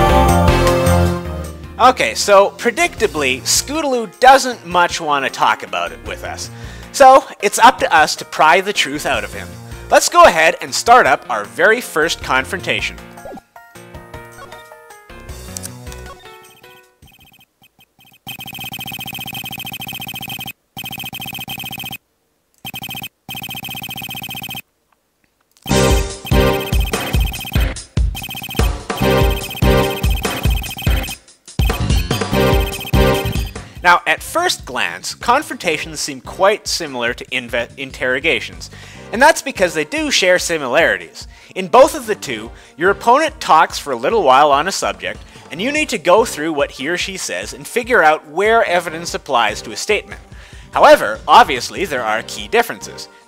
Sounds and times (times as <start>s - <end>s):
Music: 0.0s - 17.1s, 25.7s - 53.2s.